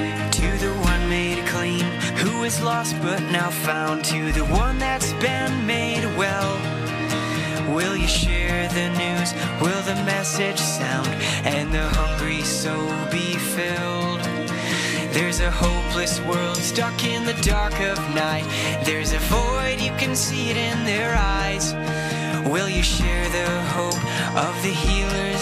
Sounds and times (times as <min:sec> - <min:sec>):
Music: 0:00.0 - 0:25.4.